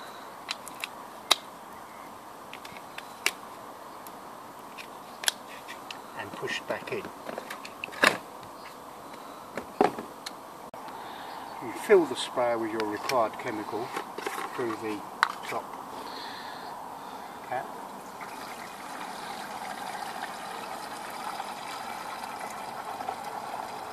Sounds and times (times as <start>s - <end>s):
Speech: 6.2s - 7.2s, 11.6s - 13.9s, 14.5s - 15.7s, 17.5s - 17.8s.